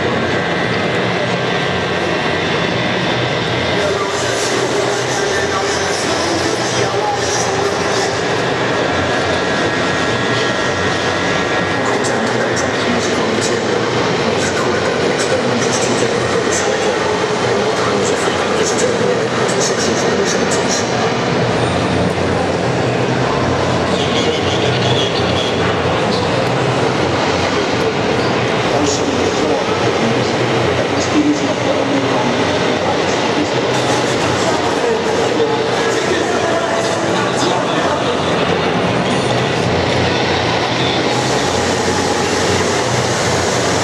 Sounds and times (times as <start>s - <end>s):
Speech: 0.0s - 43.8s
Radio: 3.6s - 21.2s, 23.4s - 26.5s, 27.2s - 43.8s.